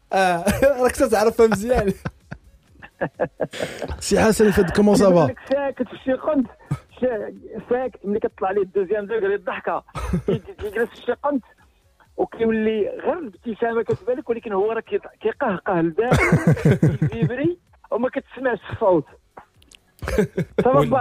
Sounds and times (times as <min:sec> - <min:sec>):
Speech: 0:00.1 - 0:02.0, 0:03.9 - 0:11.5, 0:12.2 - 0:19.1, 0:20.1 - 0:21.0
Radio: 0:03.7 - 0:11.6, 0:12.2 - 0:16.2, 0:20.6 - 0:21.0.